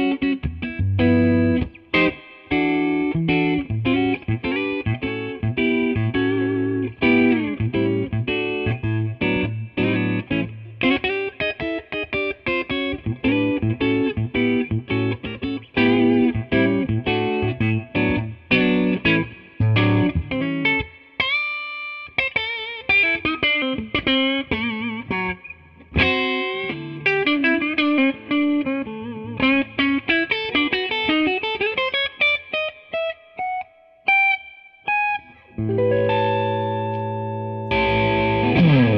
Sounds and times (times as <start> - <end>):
Music: 0.0 - 38.9.